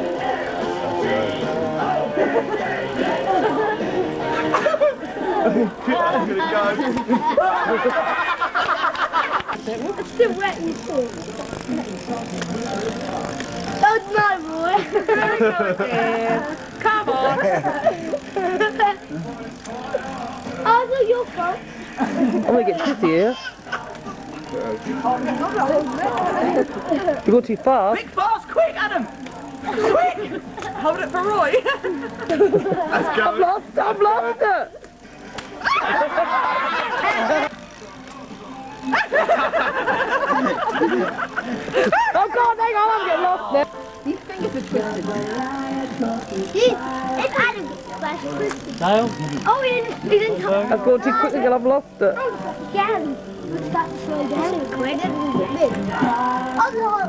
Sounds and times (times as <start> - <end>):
Music: 0.0 - 57.0.